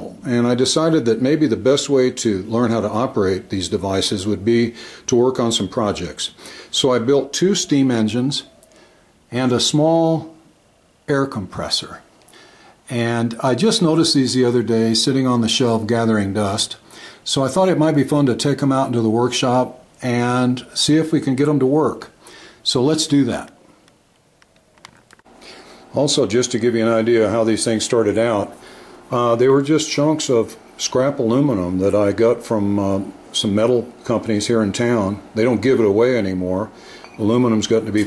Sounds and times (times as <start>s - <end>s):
Speech: 0.0s - 8.5s, 9.3s - 10.4s, 11.1s - 12.1s, 12.9s - 23.6s, 25.9s - 38.0s.